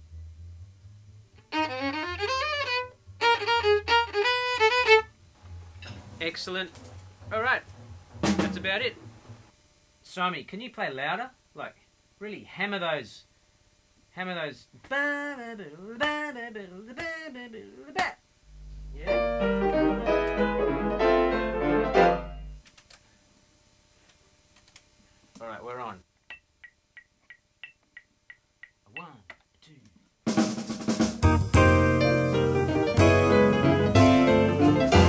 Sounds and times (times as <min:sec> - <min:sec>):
Speech: 0:06.2 - 0:07.6, 0:08.3 - 0:09.0, 0:10.0 - 0:13.3, 0:14.1 - 0:14.7, 0:19.0 - 0:19.2, 0:25.4 - 0:26.0, 0:28.9 - 0:30.0.